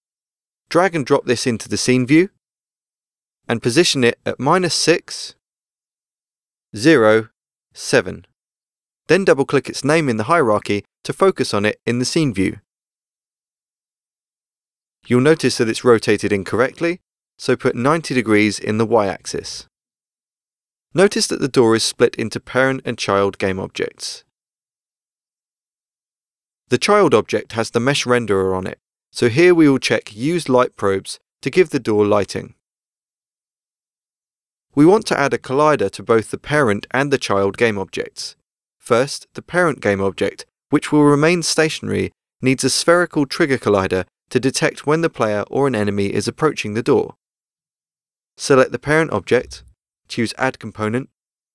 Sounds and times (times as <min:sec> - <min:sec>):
Speech: 0:00.7 - 0:02.4, 0:03.5 - 0:05.4, 0:06.8 - 0:08.3, 0:09.1 - 0:12.7, 0:15.0 - 0:19.7, 0:20.9 - 0:24.3, 0:26.7 - 0:32.6, 0:34.7 - 0:47.2, 0:48.4 - 0:51.1.